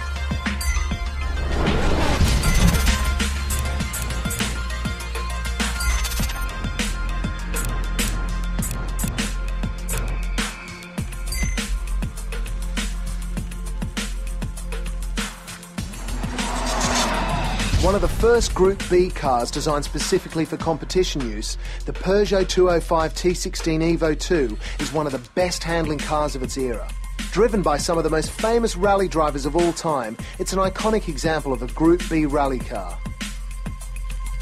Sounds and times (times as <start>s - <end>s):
Music: 0.0s - 34.4s
Speech: 17.8s - 33.0s.